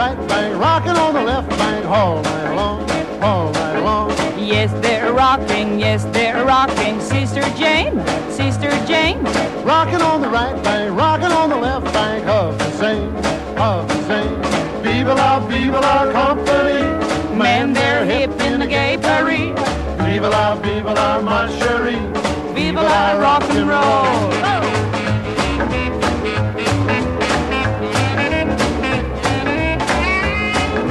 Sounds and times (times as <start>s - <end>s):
Rock and roll: 0.0s - 30.9s.